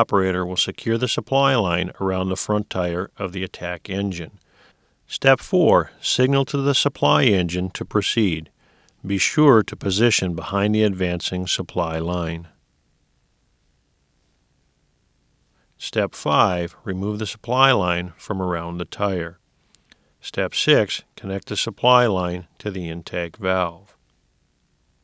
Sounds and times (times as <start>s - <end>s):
Speech: 0.0s - 4.4s, 5.1s - 12.6s, 15.8s - 19.4s, 20.2s - 24.0s.